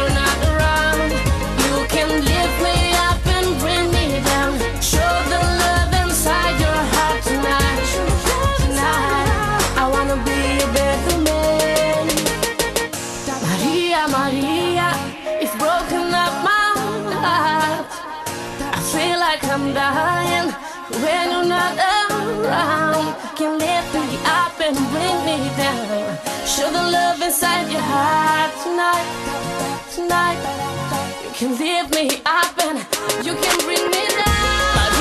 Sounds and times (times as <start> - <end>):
Singing: 0.0 - 12.5, 13.3 - 35.0
Music: 0.0 - 35.0.